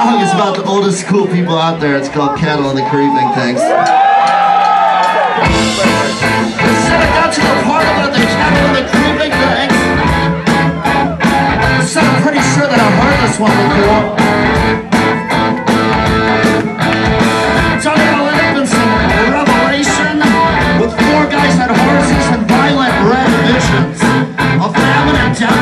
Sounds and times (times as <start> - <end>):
Music: 4.2 - 25.6.